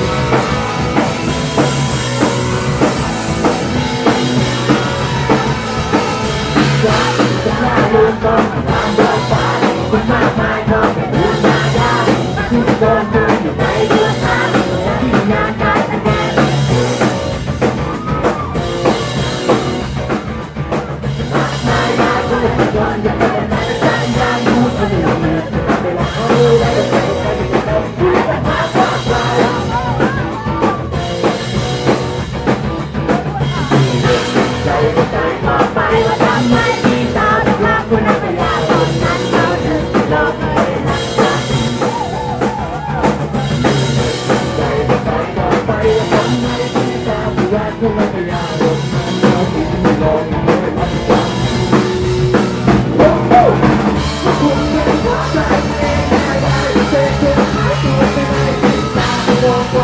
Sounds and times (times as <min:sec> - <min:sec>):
Pop music: 0:00.0 - 0:19.8, 0:21.0 - 0:32.2, 0:33.0 - 0:59.8.